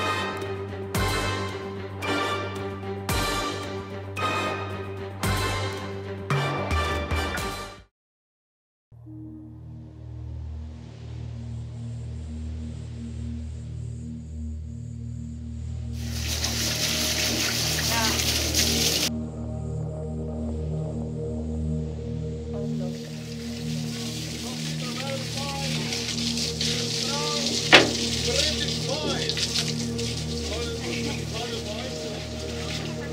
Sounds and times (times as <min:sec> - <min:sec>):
Music: 0:00.0 - 0:07.9, 0:09.0 - 0:33.1
Speech: 0:17.9 - 0:18.2, 0:24.4 - 0:26.1, 0:26.7 - 0:29.5, 0:30.4 - 0:33.1
Sailboat, sailing ship: 0:27.4 - 0:29.0.